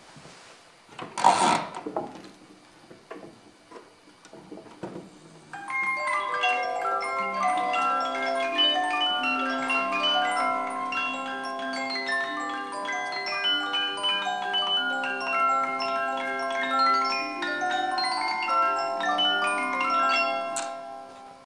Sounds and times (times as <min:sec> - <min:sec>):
Music: 0:05.5 - 0:21.4.